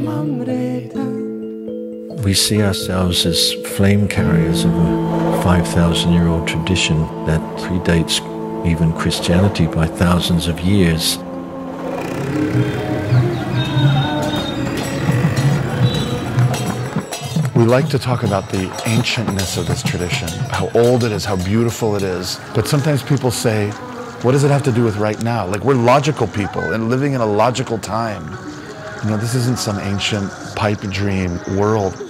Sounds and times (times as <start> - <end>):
Speech: 2.2 - 11.2, 17.6 - 28.4, 29.0 - 32.0.